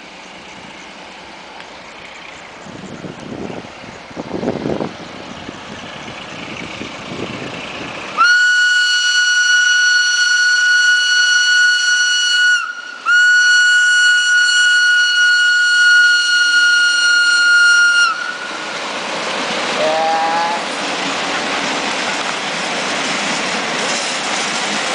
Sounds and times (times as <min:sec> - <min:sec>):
Outside, urban or manmade: 0:00.0 - 0:24.9
Railroad car, train wagon: 0:00.0 - 0:24.9
Train: 0:00.0 - 0:24.9.